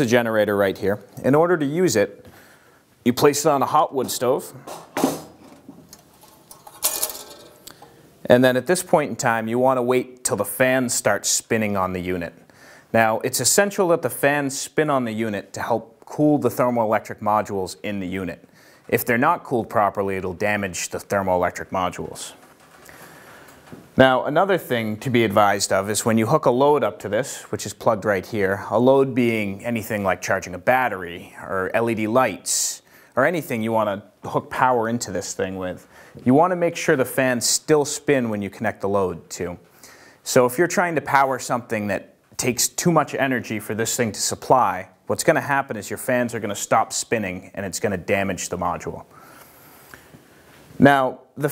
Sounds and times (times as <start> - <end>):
Speech: 0.0 - 2.2, 3.0 - 4.6, 8.2 - 22.4, 24.0 - 39.6, 40.2 - 49.1, 50.8 - 51.5.